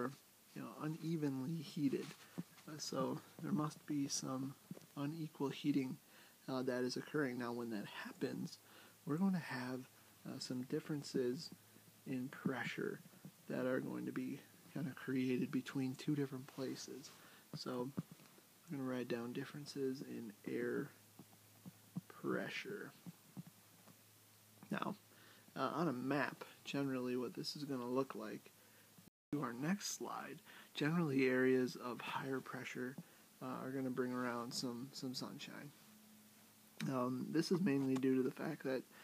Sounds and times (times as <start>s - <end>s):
Speech: 0.0s - 18.0s, 18.7s - 21.0s, 22.1s - 23.0s, 24.6s - 25.0s, 25.6s - 28.5s, 29.3s - 35.8s, 36.8s - 38.9s.